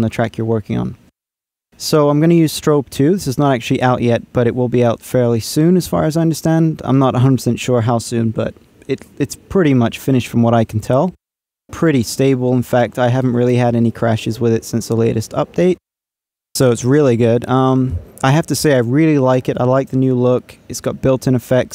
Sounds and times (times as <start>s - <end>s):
Speech: 0.0s - 1.0s, 1.8s - 15.8s, 16.6s - 21.7s.